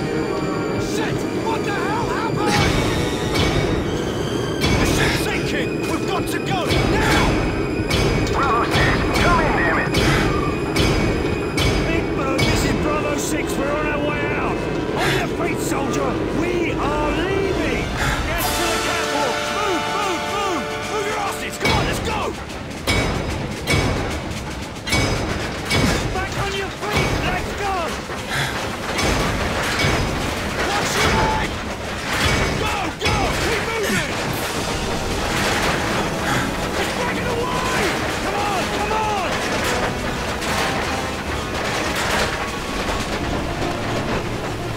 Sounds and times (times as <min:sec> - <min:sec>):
Speech: 0:11.9 - 0:22.4, 0:26.1 - 0:28.0, 0:36.8 - 0:39.3.